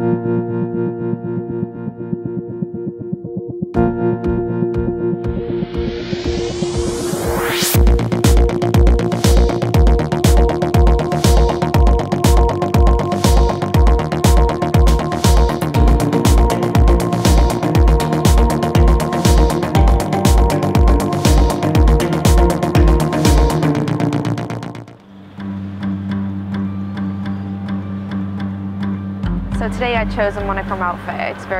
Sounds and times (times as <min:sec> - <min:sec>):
Music: 0:00.0 - 0:31.5
Speech: 0:29.6 - 0:31.5.